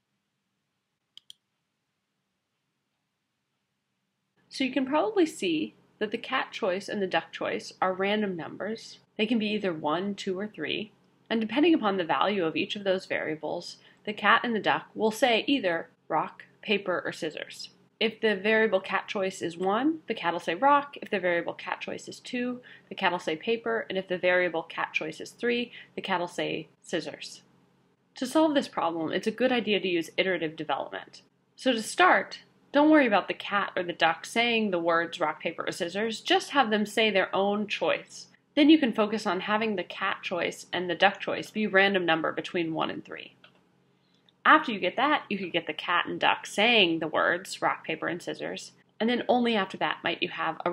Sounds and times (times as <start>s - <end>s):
Speech: 4.5s - 27.4s, 28.2s - 43.4s, 44.5s - 50.7s.